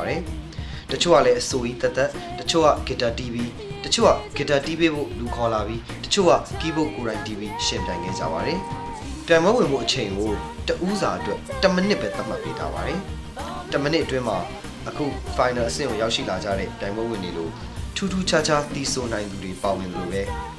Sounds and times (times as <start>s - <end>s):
Speech: 0.0s - 0.3s, 0.9s - 8.7s, 9.3s - 20.4s
Music: 0.0s - 20.5s
Female singing: 1.6s - 17.6s, 19.2s - 20.5s.